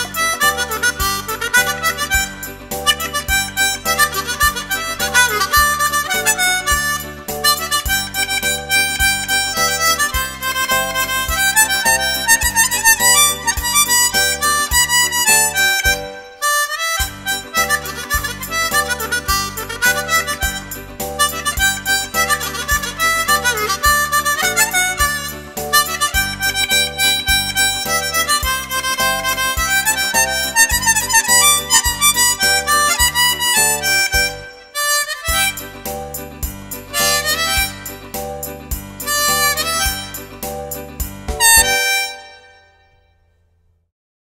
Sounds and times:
Harmonica: 0.0 - 42.8.

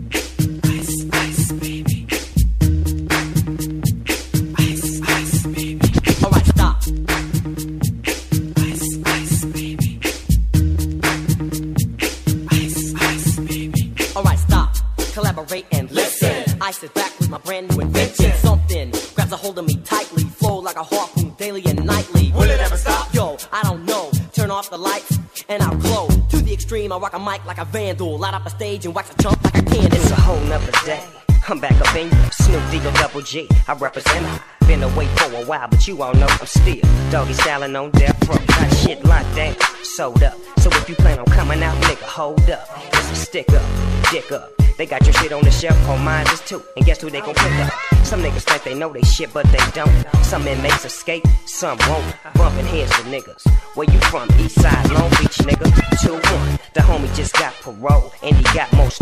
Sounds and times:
Music: 0.0 - 59.0.

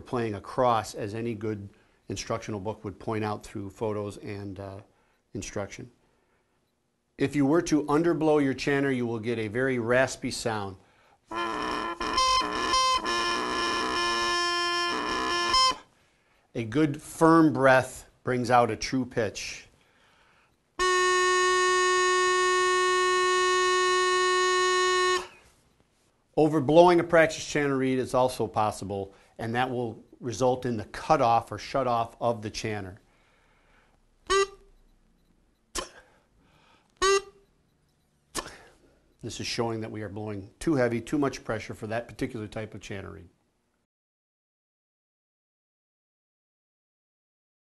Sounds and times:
Wind instrument, woodwind instrument: 11.3 - 15.9, 20.8 - 25.4, 34.3 - 34.6, 37.0 - 37.4.

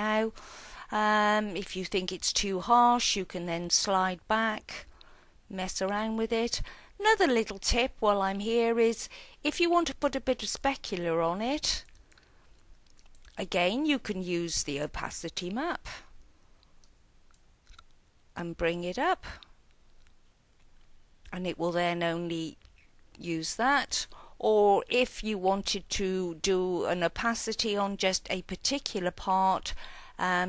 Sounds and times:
Speech: 0.0 - 4.9, 5.5 - 11.9, 13.4 - 16.0, 18.4 - 19.4, 21.3 - 22.6, 23.2 - 30.4
Inside, small room: 0.0 - 30.4.

